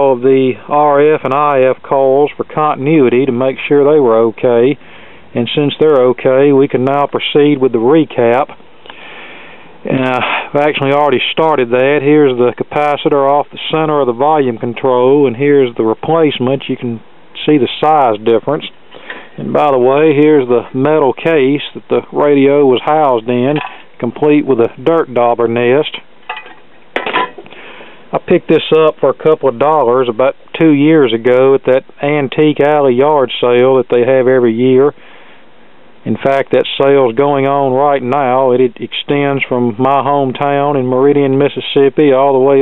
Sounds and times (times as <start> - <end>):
Speech: 0.0 - 8.6, 9.8 - 18.8, 19.4 - 26.1, 28.1 - 35.0, 36.0 - 42.6.